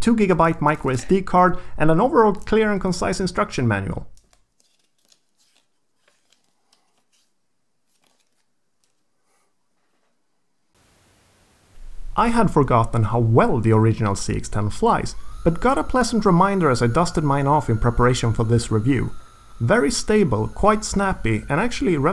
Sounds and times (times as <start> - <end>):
Speech: 0.0 - 4.1, 12.2 - 22.1
Inside, small room: 0.0 - 22.1.